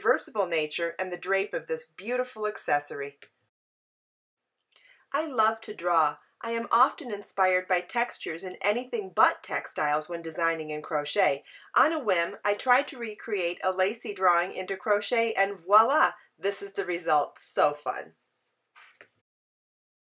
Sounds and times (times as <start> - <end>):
Speech: 0.0 - 3.2, 5.2 - 18.1.